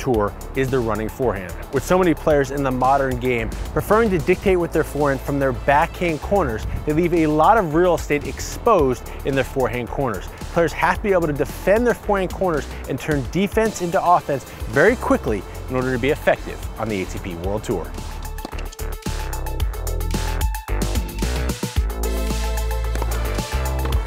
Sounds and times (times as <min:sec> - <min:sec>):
Speech: 0:00.0 - 0:18.0
Music: 0:00.0 - 0:24.0.